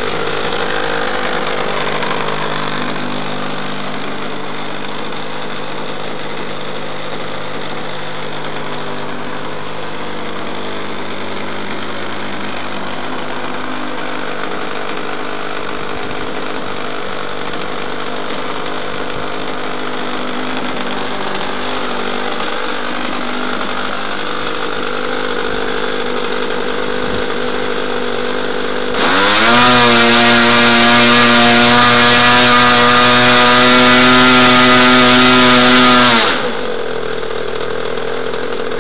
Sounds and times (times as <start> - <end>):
Idling: 0.0 - 29.4, 30.0 - 38.8
Medium engine (mid frequency): 0.0 - 38.8
Accelerating, revving, vroom: 29.0 - 36.6.